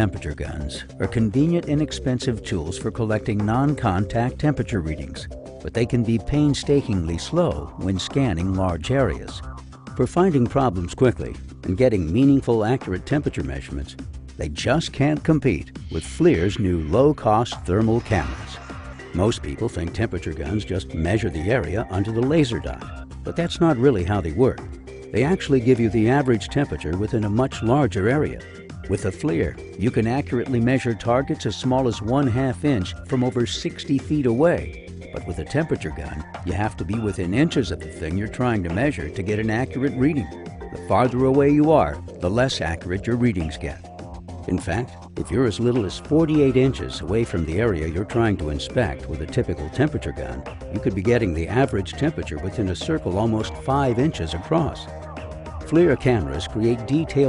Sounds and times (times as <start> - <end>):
Speech: 0.0 - 9.4, 10.0 - 43.8, 44.5 - 54.9, 55.7 - 57.2
Music: 0.0 - 57.2.